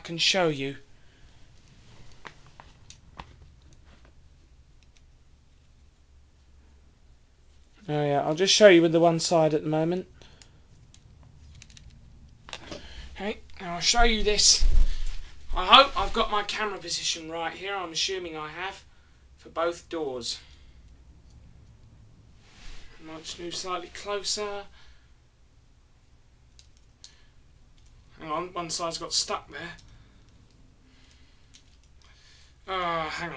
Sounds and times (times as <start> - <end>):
Speech: 0.0 - 0.8, 7.8 - 10.1, 13.2 - 14.7, 15.5 - 20.5, 23.0 - 24.7, 28.2 - 29.8, 32.7 - 33.3.